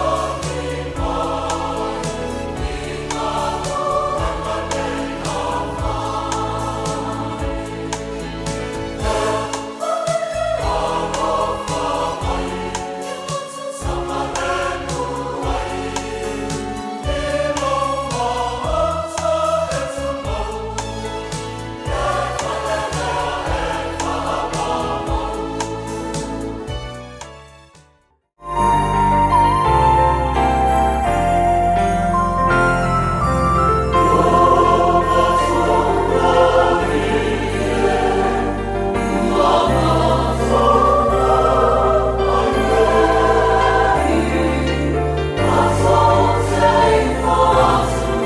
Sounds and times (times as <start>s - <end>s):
Music: 0.0s - 48.2s.